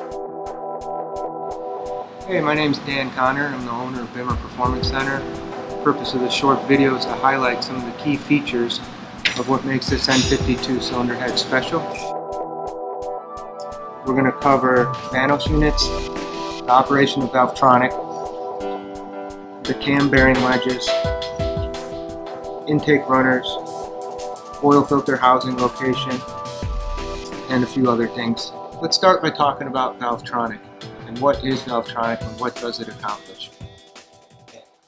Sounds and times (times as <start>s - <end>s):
Music: 0.0s - 34.8s
Speech: 2.3s - 8.8s, 9.4s - 12.1s, 14.0s - 16.0s, 16.7s - 18.0s, 19.6s - 21.4s, 22.7s - 23.6s, 24.6s - 26.2s, 27.5s - 33.5s.